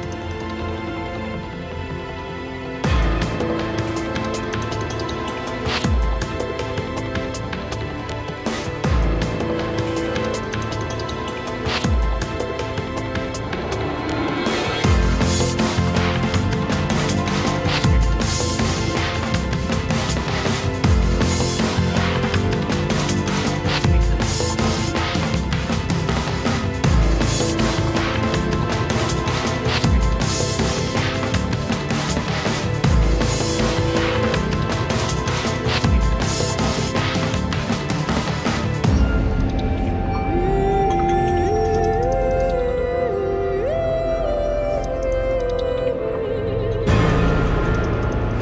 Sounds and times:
Music: 0:00.0 - 0:48.4.

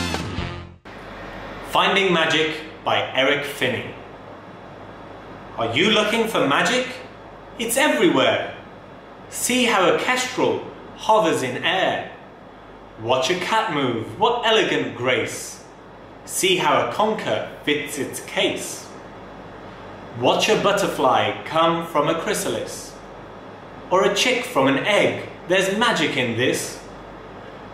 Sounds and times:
Narration, monologue: 0:01.4 - 0:27.7
Male speech, man speaking: 0:01.7 - 0:04.0, 0:05.6 - 0:08.6, 0:09.3 - 0:12.2, 0:13.0 - 0:15.7, 0:16.3 - 0:18.9, 0:20.2 - 0:23.0, 0:23.9 - 0:26.9.

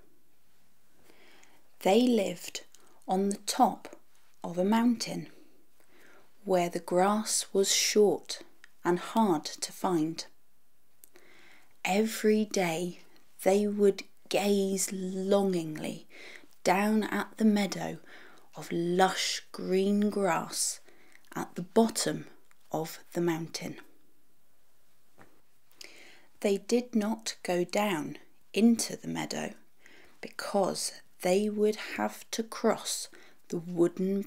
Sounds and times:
Narration, monologue: 0:00.0 - 0:34.2
Female speech, woman speaking: 0:01.8 - 0:05.3, 0:06.5 - 0:10.3, 0:11.9 - 0:16.0, 0:16.6 - 0:18.0, 0:18.6 - 0:23.8, 0:26.4 - 0:29.6, 0:30.2 - 0:34.2.

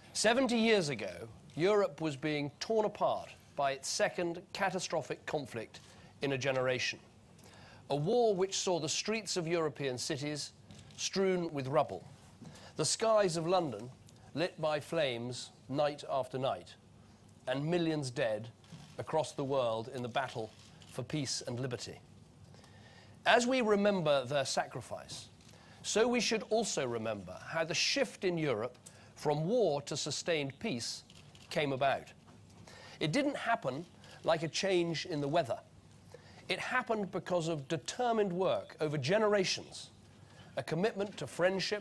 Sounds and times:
Narration, monologue: 0:00.0 - 0:41.8
Male speech, man speaking: 0:00.2 - 0:07.0, 0:07.9 - 0:12.1, 0:12.8 - 0:16.8, 0:17.5 - 0:22.0, 0:23.2 - 0:32.2, 0:33.0 - 0:35.7, 0:36.5 - 0:40.0, 0:40.6 - 0:41.8.

